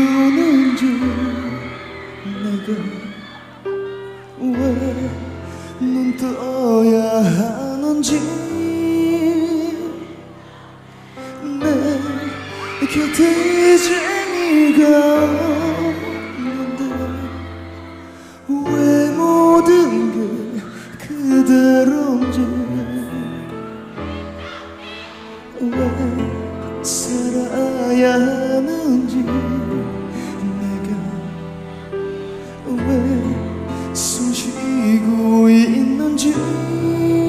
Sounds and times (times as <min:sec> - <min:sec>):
Music: 0:00.0 - 0:37.2.